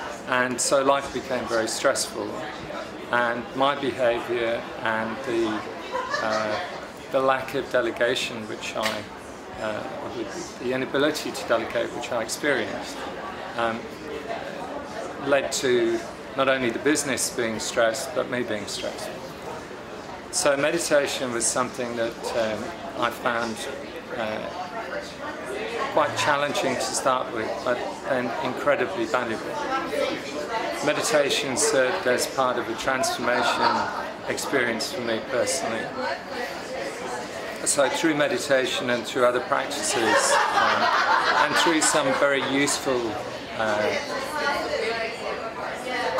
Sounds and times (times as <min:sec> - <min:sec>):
Speech: 0:00.0 - 0:19.7, 0:20.3 - 0:46.1
Inside, large room or hall: 0:00.0 - 0:46.1.